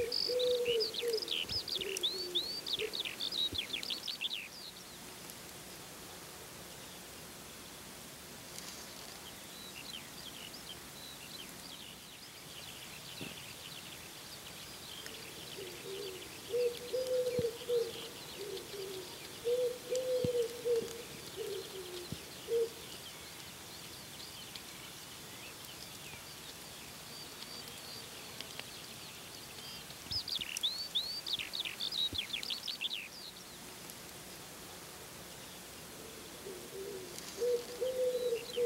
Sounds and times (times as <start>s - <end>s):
Coo: 0.0s - 3.0s, 15.2s - 22.9s, 36.0s - 38.6s.